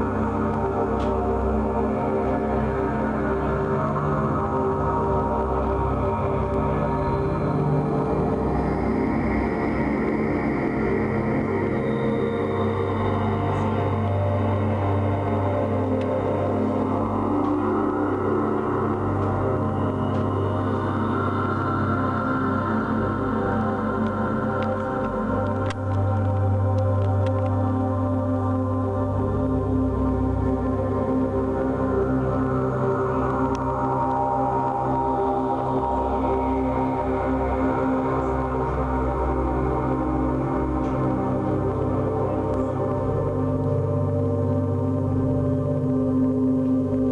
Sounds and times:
Ambient music: 0:00.0 - 0:47.1.

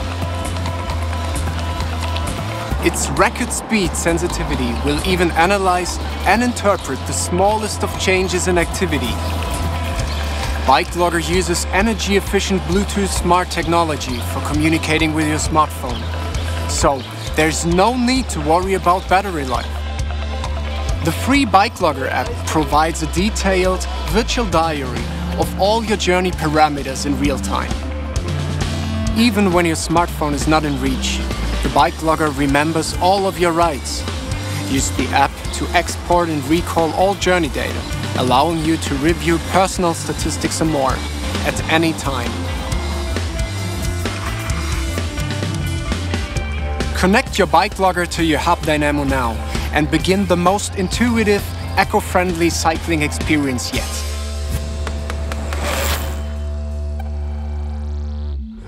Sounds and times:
Bicycle: 0:00.0 - 0:11.1
Music: 0:00.0 - 0:58.6
Speech: 0:02.8 - 0:09.2, 0:10.6 - 0:19.8, 0:21.0 - 0:27.8, 0:29.1 - 0:34.0, 0:34.6 - 0:42.4, 0:47.0 - 0:54.1.

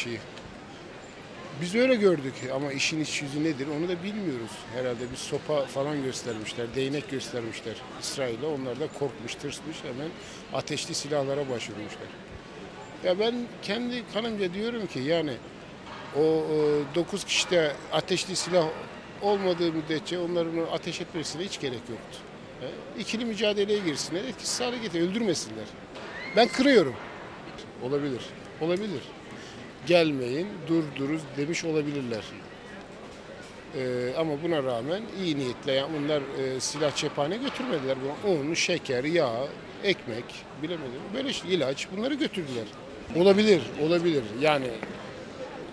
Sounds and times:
Speech: 0:00.0 - 0:00.2, 0:01.5 - 0:12.2, 0:13.0 - 0:15.4, 0:16.2 - 0:25.8, 0:27.6 - 0:29.1, 0:29.8 - 0:32.4, 0:33.7 - 0:45.0.

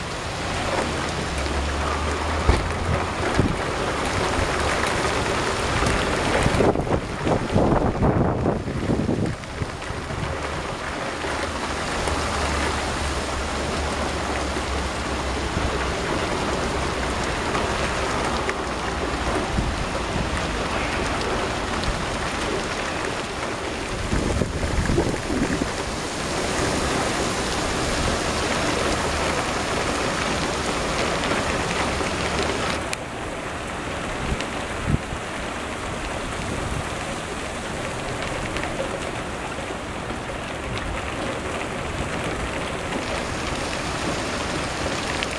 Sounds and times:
Rain on surface: 0:00.0 - 0:45.3.

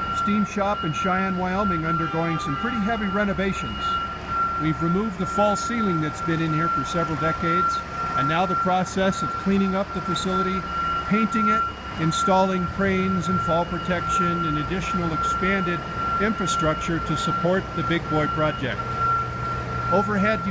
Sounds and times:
Speech: 0:00.2 - 0:04.0, 0:04.6 - 0:18.8, 0:19.9 - 0:20.5.

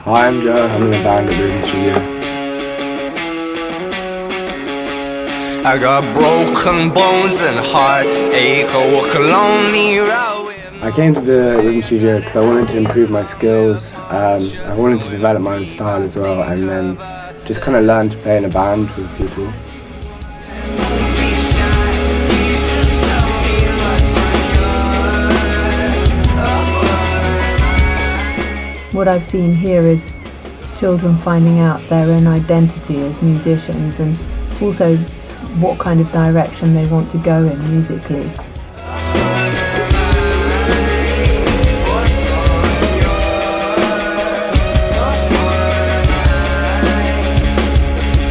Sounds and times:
Speech: 0:00.0 - 0:02.0, 0:10.8 - 0:19.6, 0:28.9 - 0:30.0, 0:30.8 - 0:38.4
Music: 0:00.0 - 0:48.3.

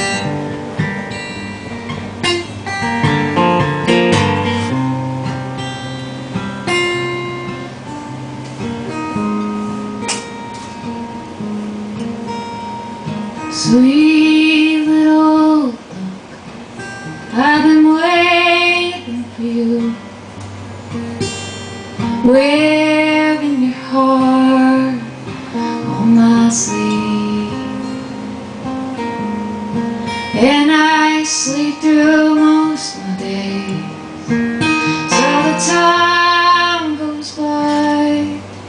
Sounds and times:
Music: 0:00.0 - 0:38.6.

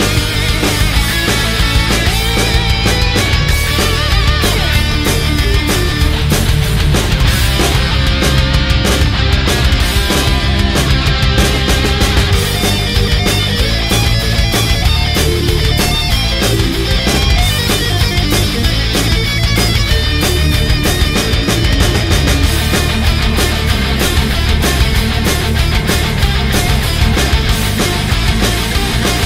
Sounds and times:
Guitar: 0:00.0 - 0:29.2.

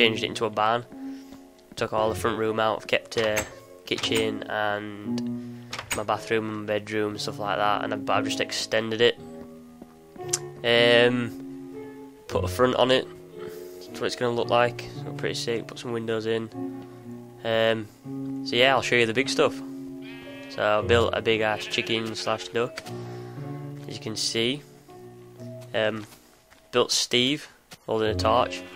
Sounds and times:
Speech: 0:00.0 - 0:00.9, 0:01.8 - 0:05.0, 0:06.0 - 0:09.2, 0:10.6 - 0:11.3, 0:12.3 - 0:13.1, 0:13.9 - 0:16.5, 0:17.4 - 0:17.9, 0:18.5 - 0:19.6, 0:20.6 - 0:22.8, 0:23.9 - 0:24.6, 0:25.7 - 0:26.1, 0:26.7 - 0:28.7
Music: 0:00.0 - 0:28.7.

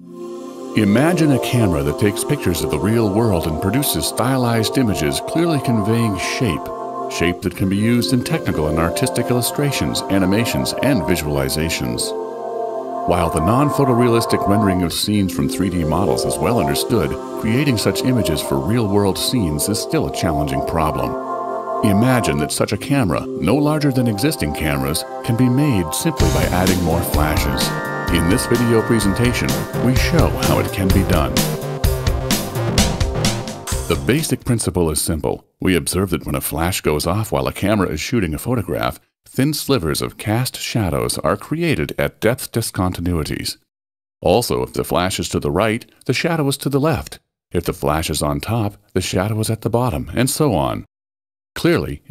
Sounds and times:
Music: 0:00.0 - 0:34.4
Speech: 0:00.8 - 0:12.1, 0:13.1 - 0:21.2, 0:21.8 - 0:31.4, 0:33.9 - 0:50.9, 0:51.6 - 0:52.1.

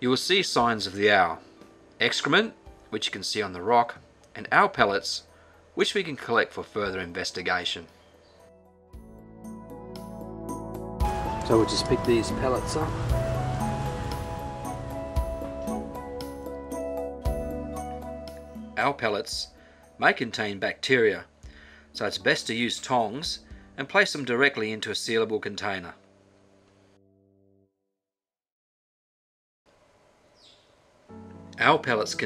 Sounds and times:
Speech: 0:00.0 - 0:01.4, 0:02.0 - 0:07.9, 0:11.4 - 0:13.0, 0:18.8 - 0:21.3, 0:22.0 - 0:26.0, 0:31.6 - 0:32.2
Music: 0:00.0 - 0:27.9, 0:31.1 - 0:32.2.

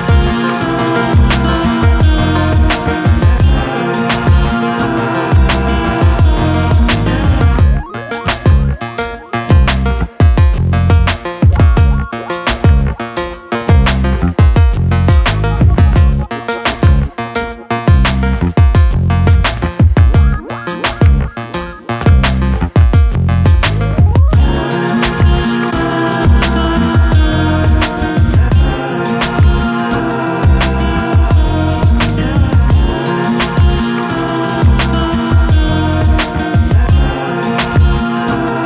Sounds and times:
Music: 0:00.0 - 0:38.6.

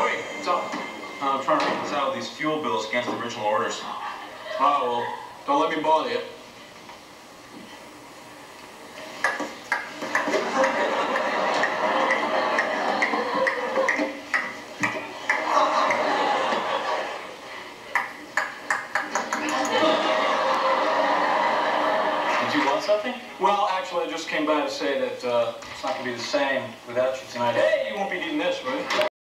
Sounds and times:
Speech: 0:22.4 - 0:29.1.

